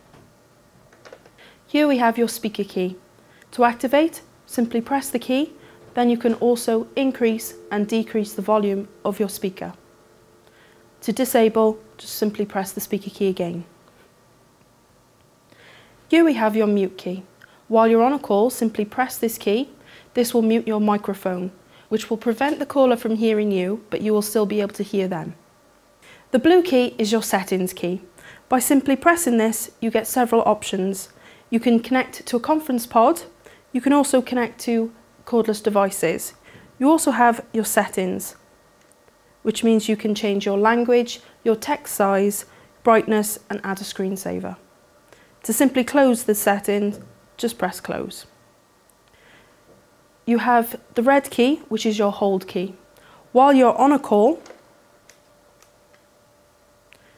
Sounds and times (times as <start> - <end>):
Speech: 1.7 - 9.8, 11.0 - 13.7, 16.1 - 25.4, 26.3 - 38.4, 39.4 - 44.6, 45.4 - 48.3, 50.3 - 54.5.